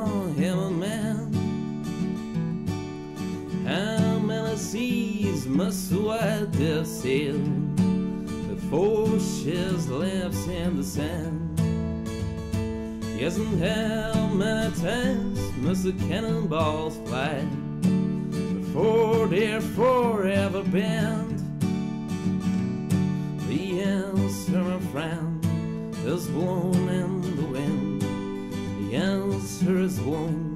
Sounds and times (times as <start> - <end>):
Music: 0.0 - 30.5.